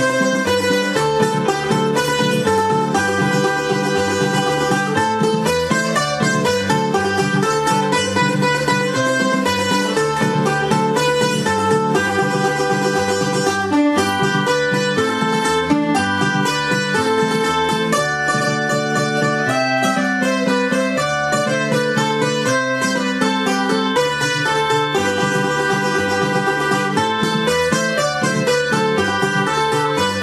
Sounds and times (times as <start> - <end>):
Music: 0.0 - 30.2.